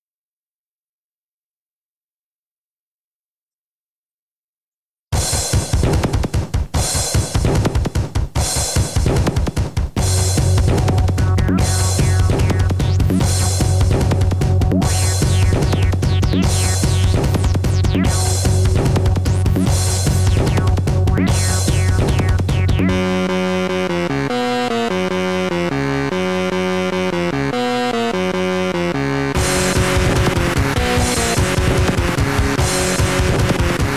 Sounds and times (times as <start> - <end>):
Electronic dance music: 5.2 - 33.9
Electronica: 10.0 - 33.9.